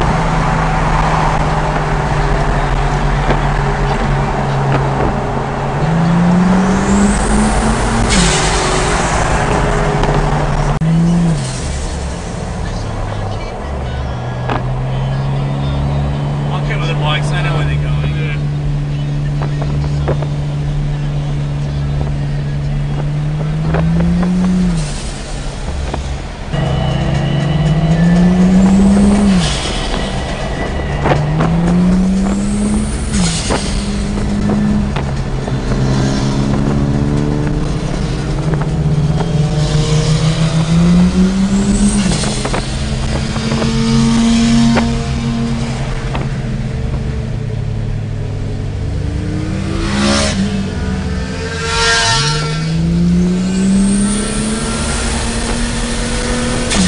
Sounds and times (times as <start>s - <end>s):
Speech: 12.6s - 23.8s.